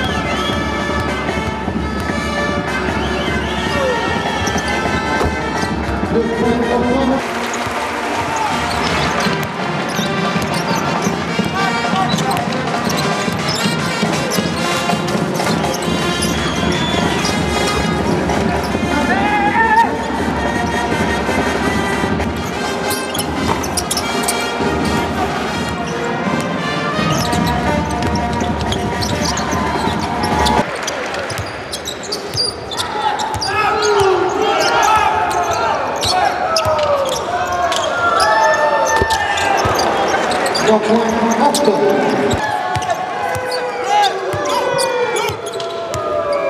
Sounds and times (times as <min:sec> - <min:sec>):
Basketball bounce: 0:00.0 - 0:02.2, 0:07.5 - 0:16.3, 0:27.2 - 0:30.6, 0:33.3 - 0:34.2, 0:42.3 - 0:43.6.